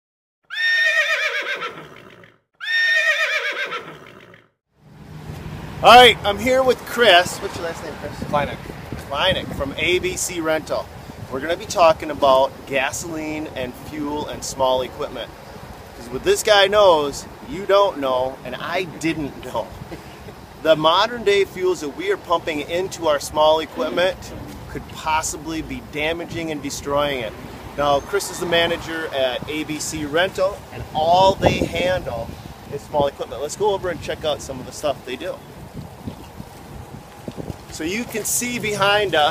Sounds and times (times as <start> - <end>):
Neigh, whinny: 0.4 - 4.5
Speech: 5.8 - 15.3, 16.0 - 19.8, 20.6 - 35.4, 37.7 - 39.3.